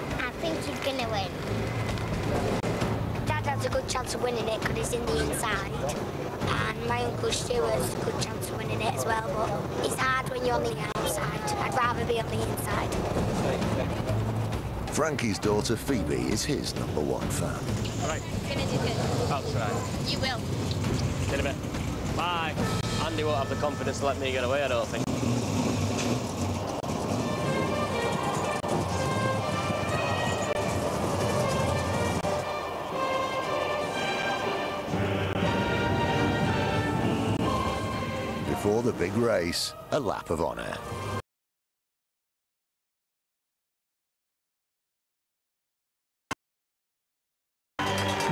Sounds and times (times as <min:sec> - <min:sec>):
Music: 0:00.0 - 0:25.0, 0:26.8 - 0:41.2, 0:47.8 - 0:48.3
Vehicle: 0:00.0 - 0:39.3.